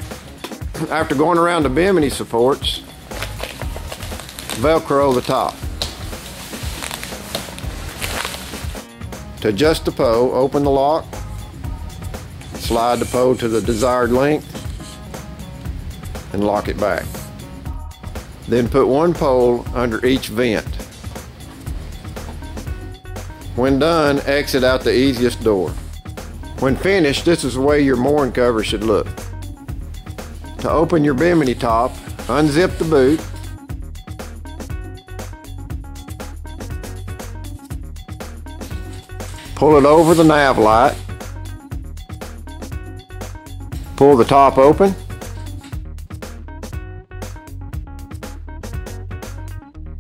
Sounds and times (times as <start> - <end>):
Music: 0.0 - 50.0
Speech: 0.8 - 2.8, 4.6 - 5.6, 9.4 - 11.1, 12.6 - 14.4, 16.3 - 17.2, 18.5 - 20.8, 23.6 - 25.8, 26.6 - 29.1, 30.6 - 33.2, 39.6 - 41.0, 44.0 - 45.0.